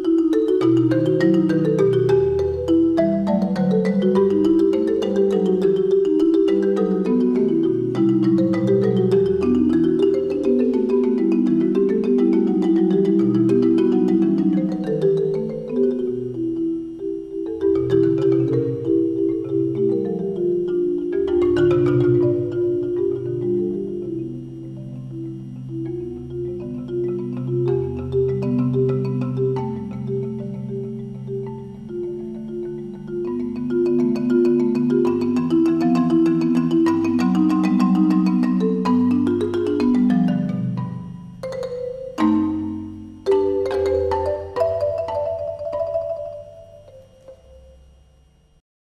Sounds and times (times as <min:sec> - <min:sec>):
Marimba, xylophone: 0:00.0 - 0:48.0.